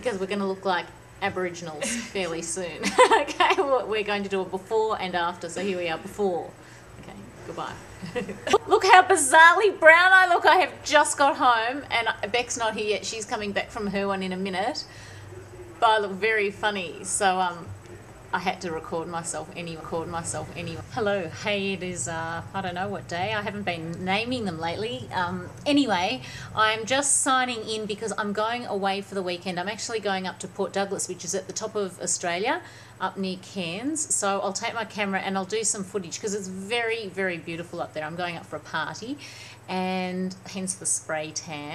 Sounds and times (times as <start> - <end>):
Speech: 0.0 - 15.0, 15.6 - 41.7.